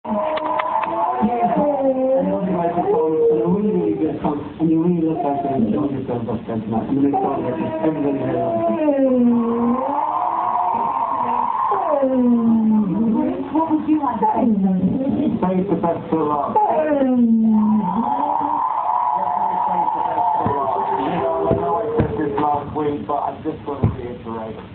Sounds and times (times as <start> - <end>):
Inside, large room or hall: 0.1 - 24.7
Speech: 1.1 - 9.3, 19.2 - 24.6.